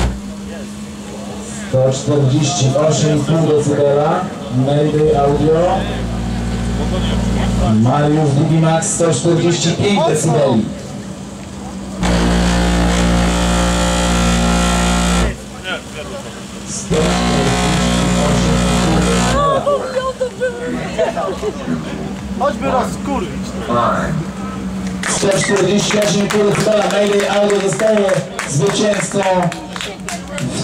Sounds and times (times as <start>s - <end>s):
Speech: 0.4s - 10.9s, 15.3s - 30.6s.